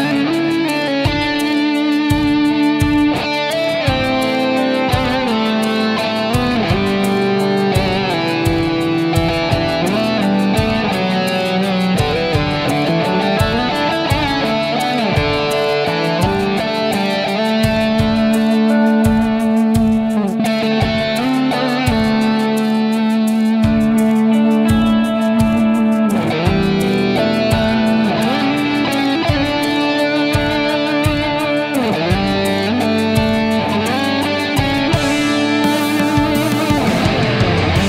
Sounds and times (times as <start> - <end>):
Electric guitar: 0.0 - 37.8
Strum: 0.0 - 37.8.